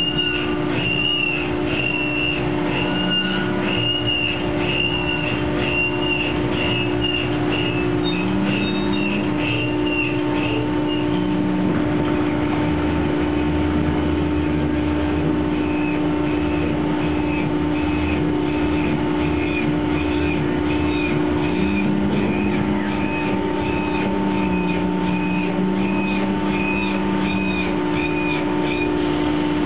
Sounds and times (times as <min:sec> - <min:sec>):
Truck: 0:00.0 - 0:29.6.